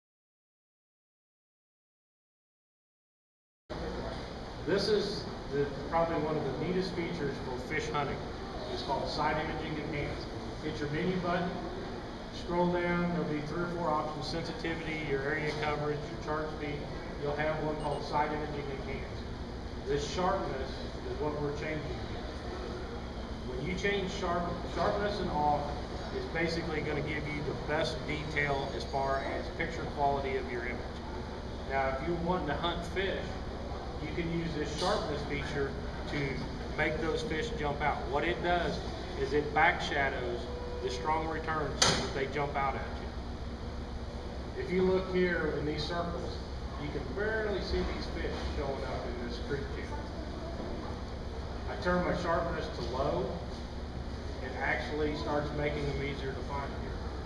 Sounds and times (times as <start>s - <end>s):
Speech: 3.7s - 22.8s, 23.4s - 31.0s, 31.7s - 33.4s, 34.0s - 43.2s, 44.5s - 51.0s, 51.6s - 53.5s, 54.4s - 57.0s.